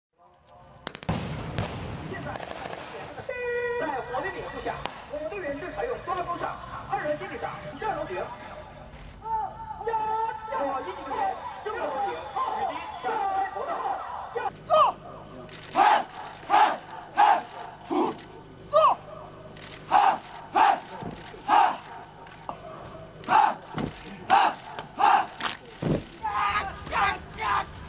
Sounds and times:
Firecracker: 0.6 - 3.8, 4.6 - 5.7.

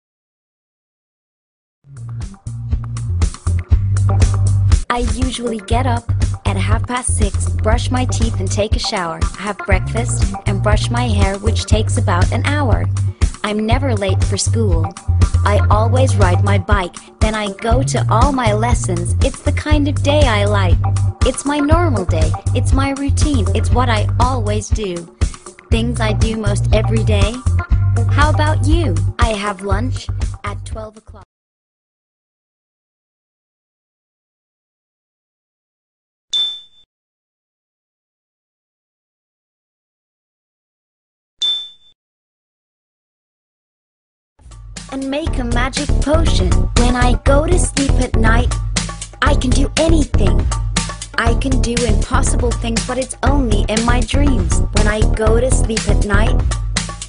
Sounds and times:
Music: 1.8 - 31.3, 44.4 - 57.0
Speech: 4.9 - 25.1, 25.7 - 27.4, 28.0 - 31.3, 44.9 - 48.5, 49.2 - 50.5, 51.2 - 56.4.

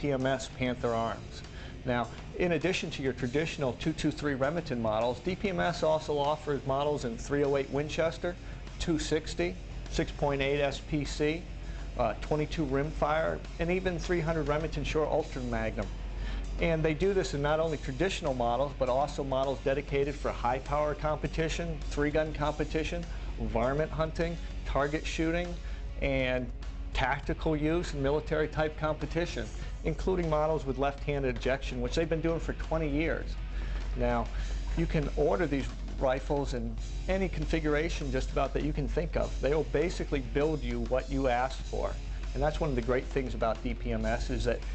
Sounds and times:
Speech: 0.0 - 15.9, 16.6 - 33.4, 34.0 - 44.7
Music: 0.0 - 44.7.

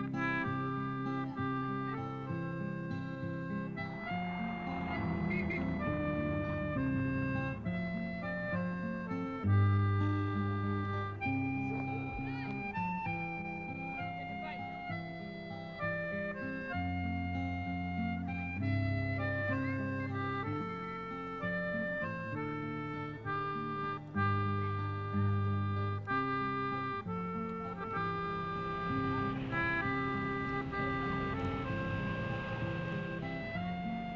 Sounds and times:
Music: 0.0 - 34.1.

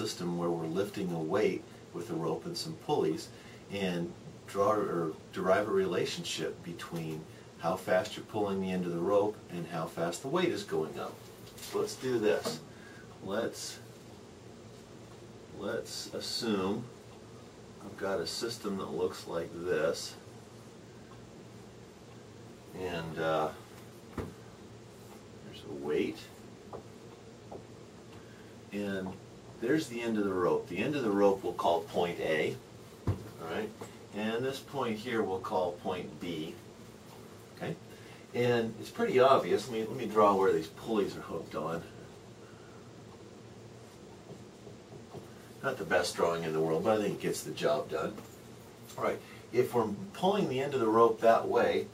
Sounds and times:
Speech: 0.0 - 13.9, 15.5 - 16.9, 17.8 - 20.3, 22.7 - 23.6, 25.4 - 26.4, 28.7 - 32.6, 33.4 - 36.6, 37.6 - 42.0, 45.6 - 48.3, 48.9 - 51.9.

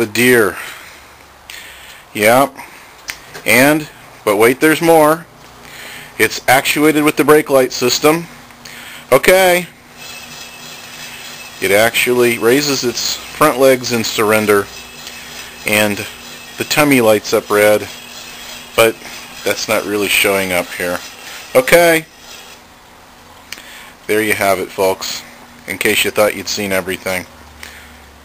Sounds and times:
Speech: 0.0 - 0.6, 2.2 - 2.6, 3.4 - 5.3, 6.2 - 8.3, 9.1 - 9.7, 11.6 - 14.7, 15.6 - 18.0, 18.8 - 22.1, 24.1 - 27.3.

